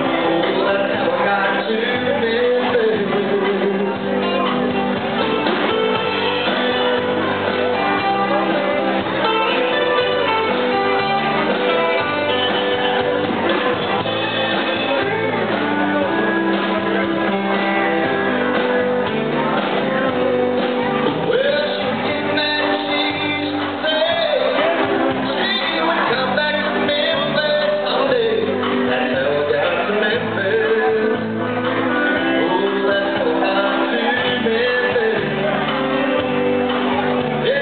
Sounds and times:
Background music: 0:00.0 - 0:37.6.

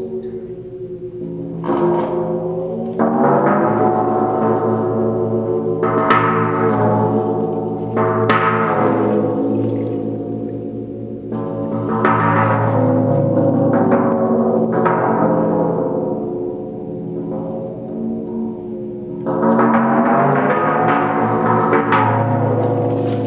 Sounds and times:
Gong: 0:00.0 - 0:23.2.

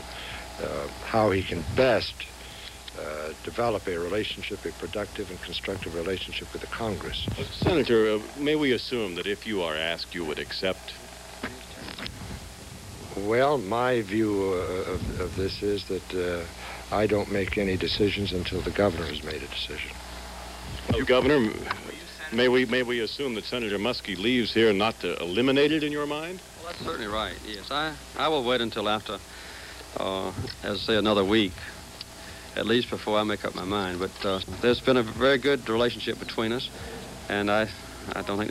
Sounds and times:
Speech: 0:00.6 - 0:12.1, 0:13.1 - 0:20.0, 0:20.8 - 0:29.3, 0:29.9 - 0:31.8, 0:32.6 - 0:38.5.

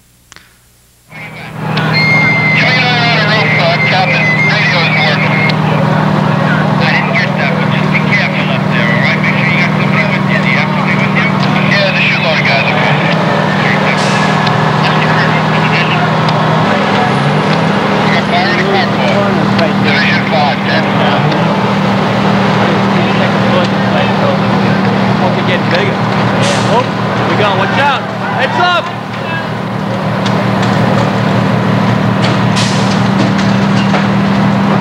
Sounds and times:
Speech: 0:02.6 - 0:17.4, 0:18.1 - 0:21.6, 0:22.5 - 0:29.6.

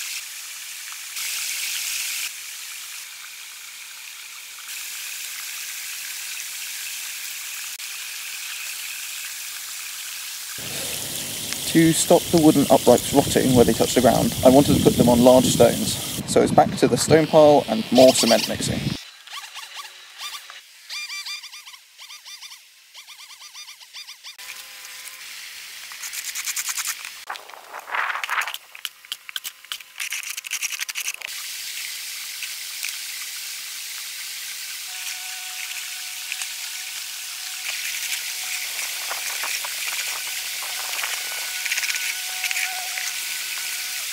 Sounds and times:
Stream: 0:00.0 - 0:16.4, 0:25.7 - 0:44.1
Speech: 0:11.7 - 0:18.8.

